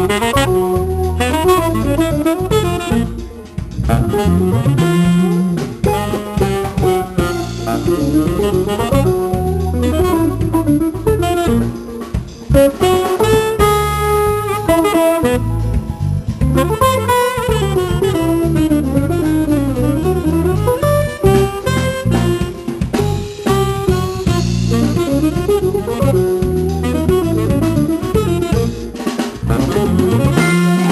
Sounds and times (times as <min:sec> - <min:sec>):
Brass instrument: 0:00.0 - 0:30.9
Drum: 0:00.0 - 0:30.9
Drum kit: 0:00.0 - 0:30.9
Guitar: 0:00.0 - 0:30.9
Saxophone: 0:00.0 - 0:30.9.